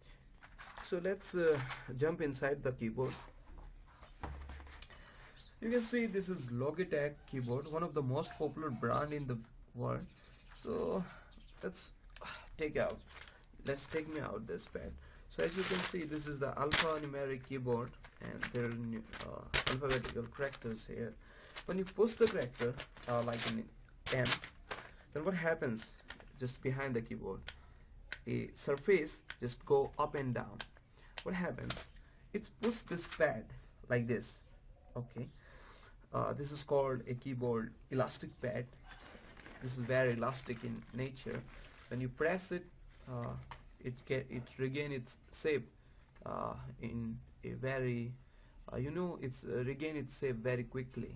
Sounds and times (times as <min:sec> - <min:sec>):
Speech: 0:00.8 - 0:03.3, 0:05.6 - 0:24.5, 0:25.2 - 0:27.5, 0:28.2 - 0:35.4, 0:36.1 - 0:38.7, 0:39.6 - 0:51.1.